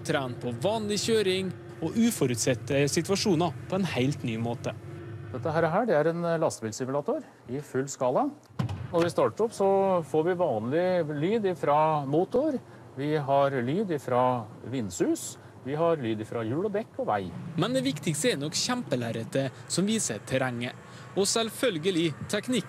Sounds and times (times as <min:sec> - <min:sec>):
Speech: 0:00.0 - 0:04.8, 0:05.4 - 0:22.6.